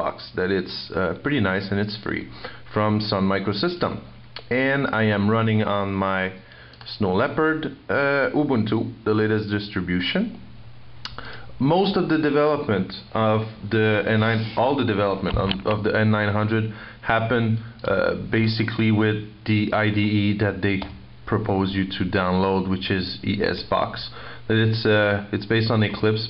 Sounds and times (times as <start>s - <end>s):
Speech: 0.0s - 10.5s, 11.6s - 26.2s.